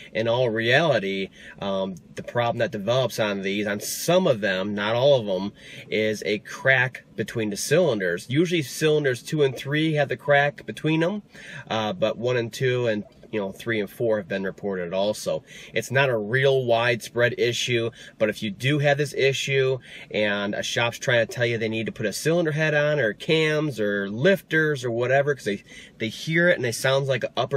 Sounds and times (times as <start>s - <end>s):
Speech: 0.1s - 27.5s.